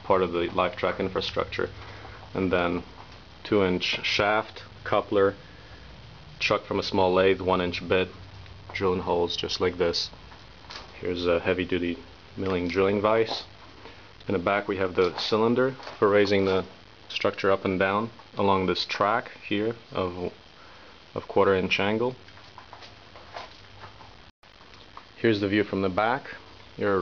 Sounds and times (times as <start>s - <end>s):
Speech: 0.0s - 5.4s, 6.4s - 10.2s, 10.9s - 13.5s, 14.2s - 20.4s, 21.2s - 22.2s, 25.2s - 27.0s.